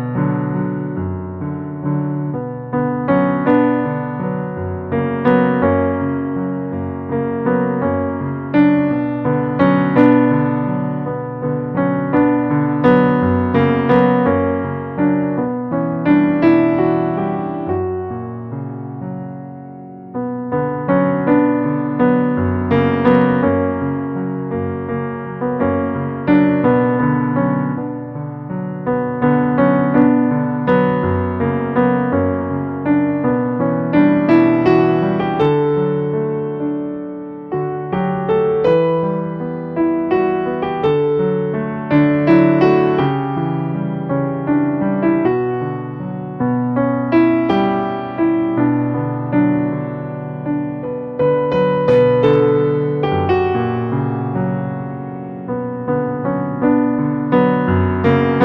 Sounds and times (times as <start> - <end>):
Music: 0.0 - 58.4.